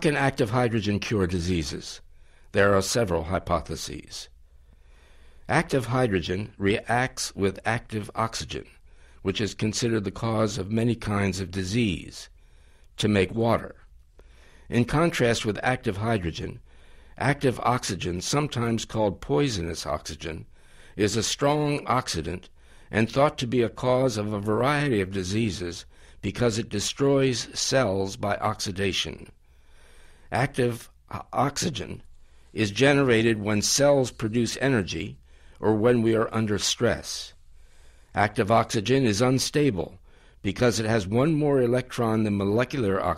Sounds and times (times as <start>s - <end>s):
Speech: 0.0s - 4.3s, 5.5s - 12.3s, 13.0s - 13.9s, 14.7s - 16.6s, 17.2s - 29.4s, 30.3s - 37.4s, 38.2s - 43.1s.